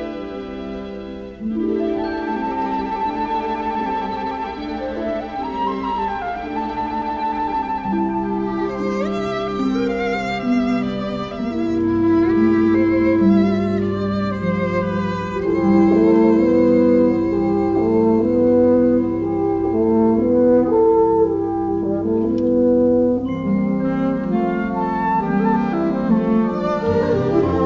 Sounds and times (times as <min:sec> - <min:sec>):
Bowed string instrument: 0:00.0 - 0:27.6.